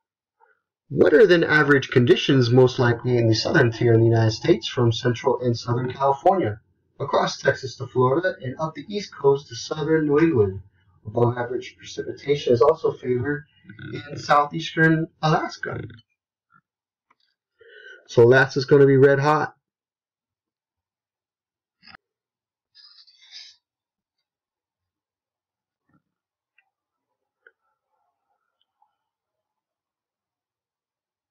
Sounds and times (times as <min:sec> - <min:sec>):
Speech: 0:00.9 - 0:16.0, 0:18.0 - 0:19.5.